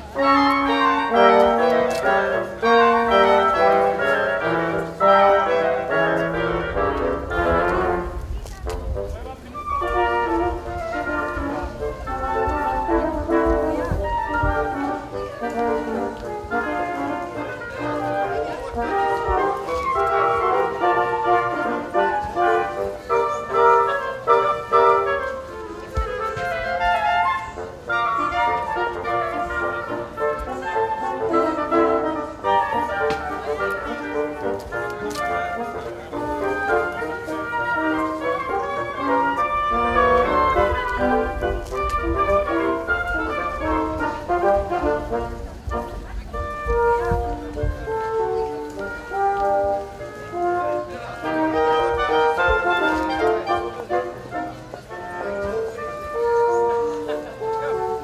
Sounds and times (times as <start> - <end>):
Music: 0.0 - 58.0
Speech: 0.2 - 58.0.